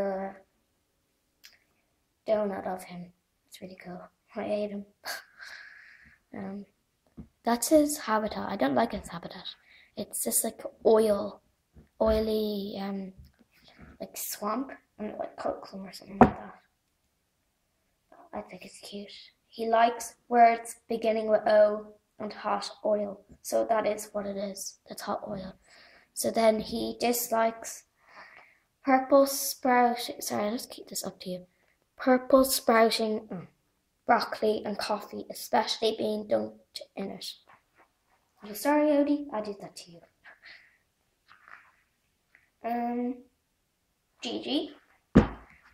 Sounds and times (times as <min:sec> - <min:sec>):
Speech: 0:00.0 - 0:00.5, 0:02.2 - 0:05.3, 0:06.3 - 0:06.8, 0:07.4 - 0:11.4, 0:12.0 - 0:13.3, 0:14.0 - 0:16.7, 0:18.2 - 0:25.6, 0:26.2 - 0:27.9, 0:28.8 - 0:37.5, 0:38.4 - 0:40.6, 0:42.6 - 0:43.3, 0:44.2 - 0:44.8.